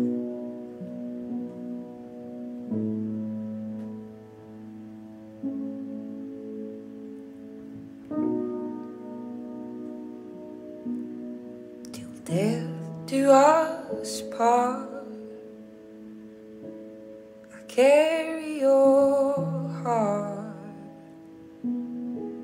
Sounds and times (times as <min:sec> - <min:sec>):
Music: 0:00.0 - 0:22.4.